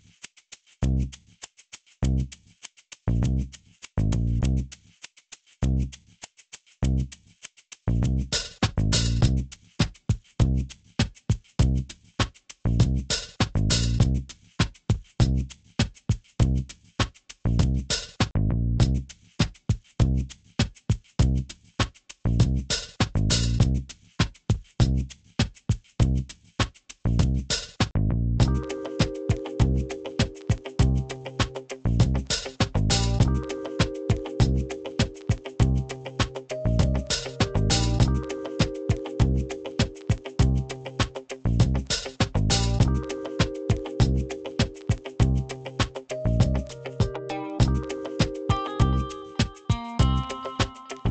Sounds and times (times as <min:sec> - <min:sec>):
Music: 0:07.9 - 0:51.1.